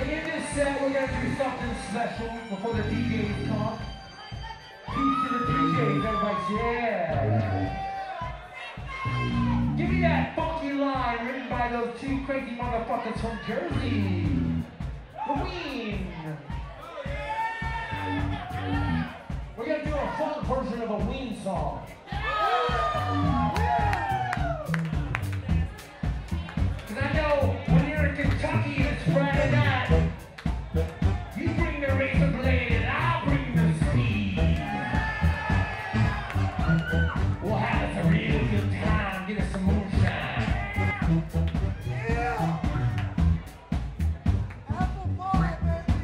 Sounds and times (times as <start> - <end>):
Speech: 0.0 - 14.6, 15.2 - 17.2, 18.0 - 22.2, 25.4 - 30.1, 31.3 - 34.7, 37.4 - 41.1, 44.7 - 46.0
Music: 0.0 - 46.0.